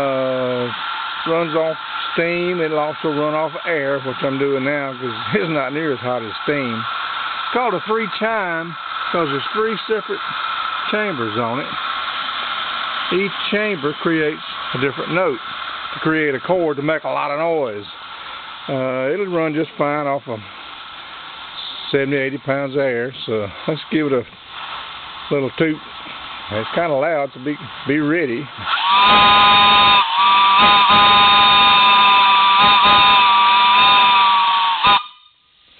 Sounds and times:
Hiss: 0.0s - 35.7s.

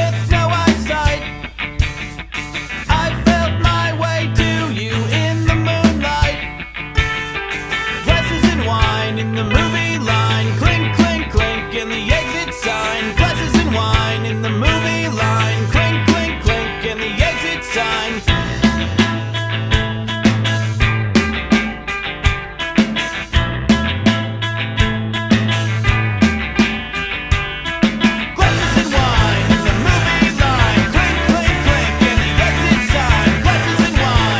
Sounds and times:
Punk rock: 0.0s - 34.3s.

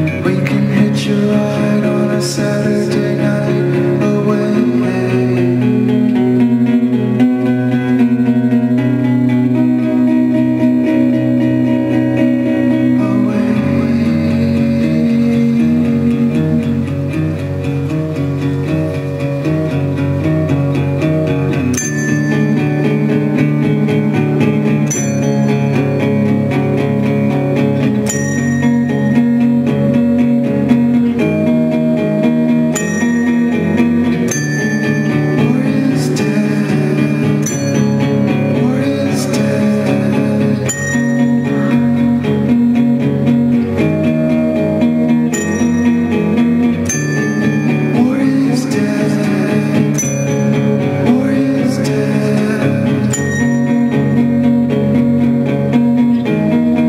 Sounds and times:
Singing: 0.0s - 5.7s, 12.8s - 16.4s, 35.4s - 37.5s, 38.5s - 41.8s, 47.9s - 50.2s, 50.8s - 53.5s
Guitar: 0.0s - 56.8s.

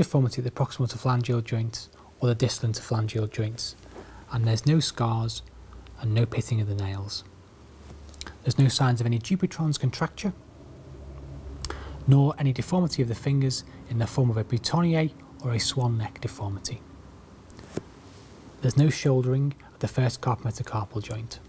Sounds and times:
Speech: 0.0s - 7.3s, 8.4s - 10.4s, 12.1s - 16.8s, 18.6s - 21.4s.

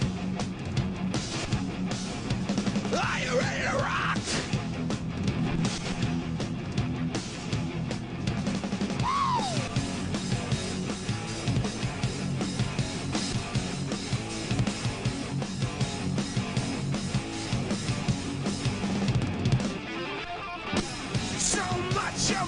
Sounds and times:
Music: 0.0s - 22.4s
Yell: 2.9s - 4.5s, 9.0s - 9.8s.

